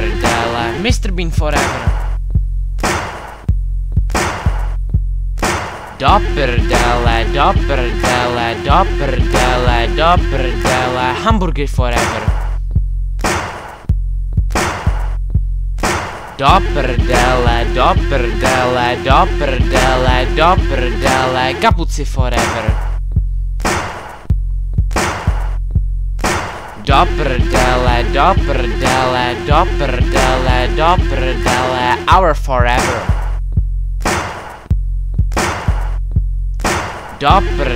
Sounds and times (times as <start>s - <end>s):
Music: 0.0s - 37.7s.